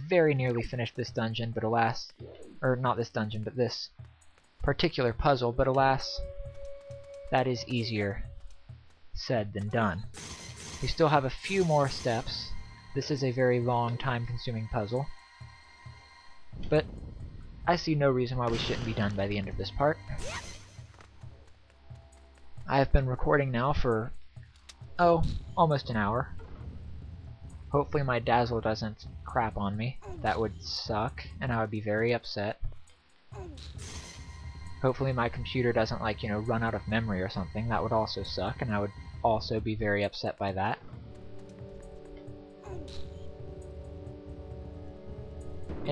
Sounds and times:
Speech: 0:00.0 - 0:04.0, 0:04.6 - 0:06.2, 0:07.4 - 0:08.3, 0:09.2 - 0:10.1, 0:10.8 - 0:15.1, 0:17.7 - 0:20.4, 0:22.7 - 0:24.2, 0:25.0 - 0:26.3, 0:27.8 - 0:32.6, 0:34.8 - 0:40.8.

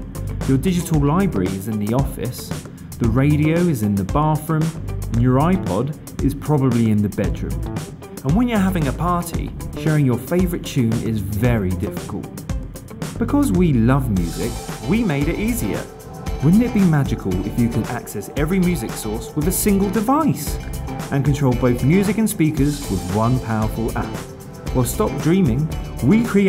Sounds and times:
Speech: 0:00.5 - 0:07.6, 0:08.2 - 0:12.4, 0:13.2 - 0:26.4
Soundtrack music: 0:07.4 - 0:26.4.

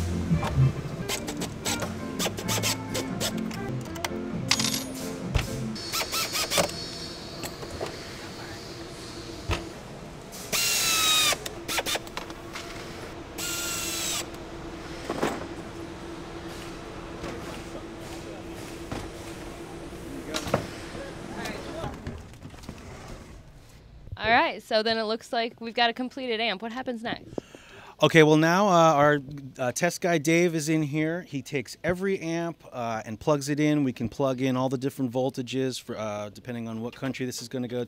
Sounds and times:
Mechanisms: 0:00.0 - 0:37.8
Power tool: 0:01.1 - 0:03.4, 0:05.8 - 0:08.3, 0:10.4 - 0:15.4.

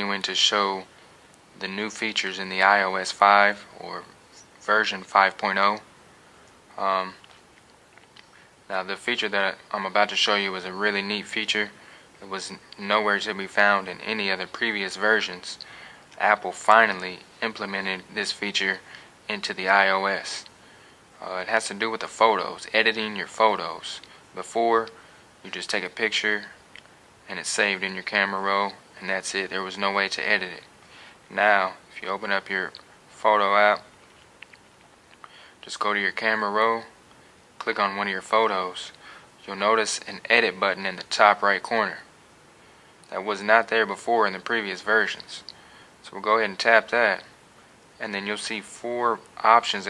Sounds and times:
Speech: 0:00.0 - 0:00.9, 0:01.6 - 0:05.9, 0:06.7 - 0:07.3, 0:08.7 - 0:20.5, 0:21.2 - 0:26.6, 0:27.3 - 0:30.7, 0:31.3 - 0:33.9, 0:35.6 - 0:37.0, 0:37.6 - 0:42.1, 0:43.1 - 0:47.3, 0:48.0 - 0:49.8.

